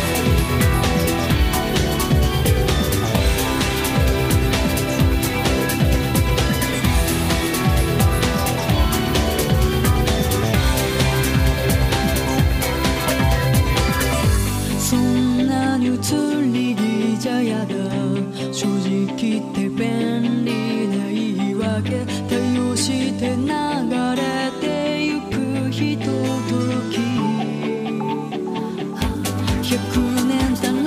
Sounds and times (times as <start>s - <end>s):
Music: 0.0s - 30.8s.